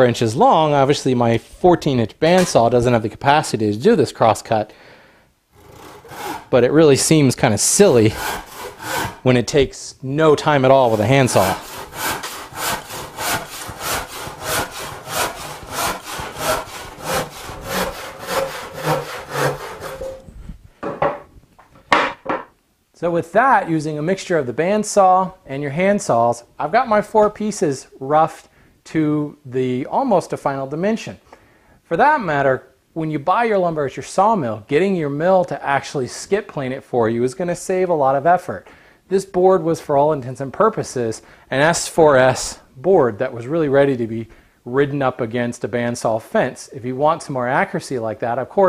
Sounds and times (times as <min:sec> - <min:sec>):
Sawing: 0:05.5 - 0:06.7, 0:07.4 - 0:09.4, 0:10.6 - 0:20.3
Wood: 0:08.1 - 0:09.2, 0:10.9 - 0:21.3.